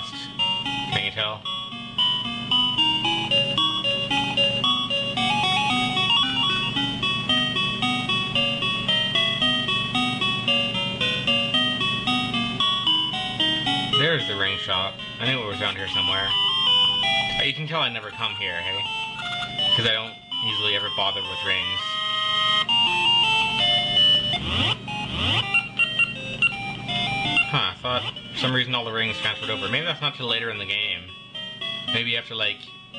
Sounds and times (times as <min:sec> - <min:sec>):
Music: 0:00.0 - 0:32.9
Speech: 0:00.9 - 0:01.4, 0:14.0 - 0:16.3, 0:17.4 - 0:18.9, 0:19.8 - 0:21.8, 0:27.4 - 0:31.1, 0:31.9 - 0:32.7.